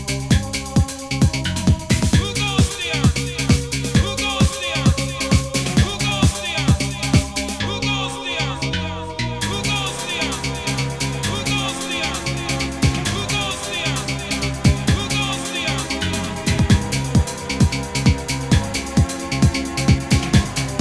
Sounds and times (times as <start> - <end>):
Music: 0.0 - 20.8.